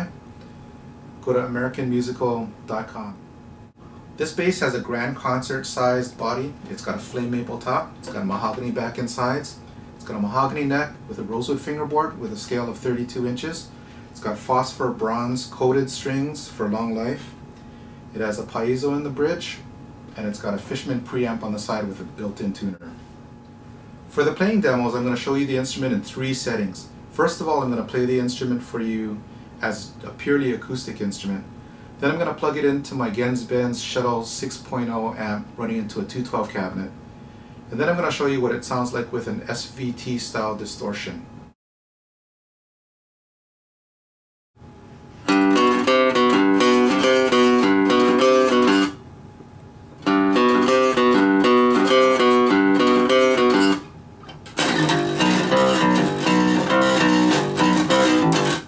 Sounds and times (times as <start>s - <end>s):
Speech: 0.0s - 0.2s, 1.2s - 3.2s, 4.2s - 17.4s, 18.1s - 23.0s, 24.1s - 37.0s, 37.7s - 41.3s.